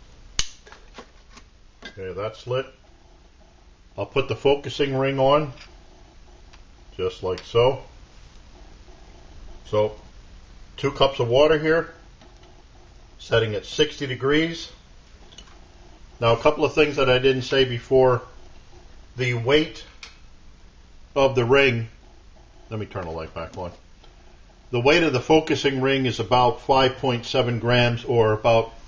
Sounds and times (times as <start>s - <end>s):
Inside, small room: 0.0s - 28.8s
Speech: 1.9s - 2.8s, 4.0s - 5.6s, 6.9s - 7.9s, 9.7s - 10.0s, 10.8s - 12.0s, 13.2s - 14.8s, 16.2s - 18.3s, 19.2s - 19.9s, 21.2s - 22.0s, 22.7s - 23.8s, 24.7s - 28.8s.